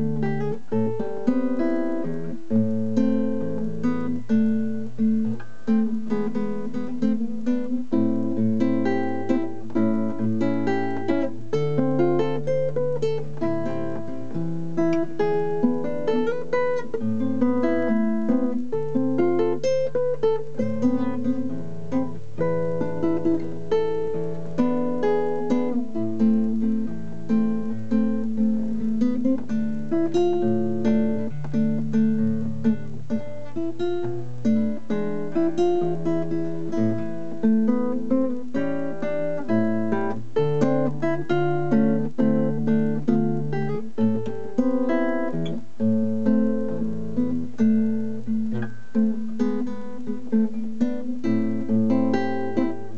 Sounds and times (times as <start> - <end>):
Strum: 0.0 - 52.9.